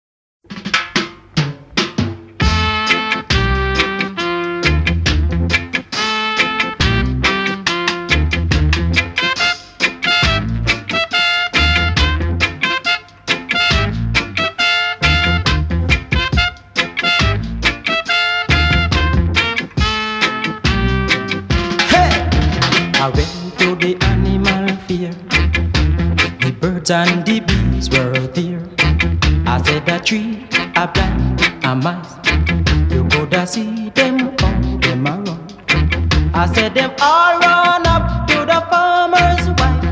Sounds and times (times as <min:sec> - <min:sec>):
Music: 0:00.5 - 0:39.9.